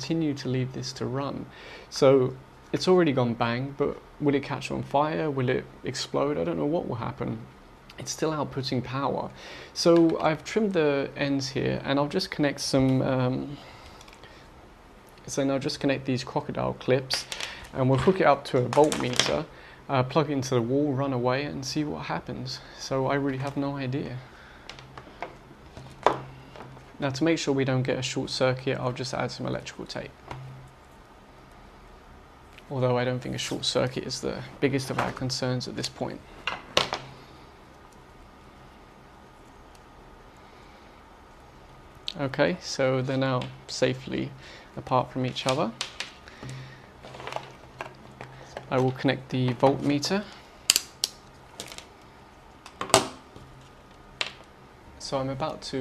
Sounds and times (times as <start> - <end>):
Speech: 0.0 - 13.7, 15.2 - 24.3, 27.0 - 30.2, 32.6 - 36.3, 42.1 - 45.8, 48.7 - 50.4, 55.0 - 55.8.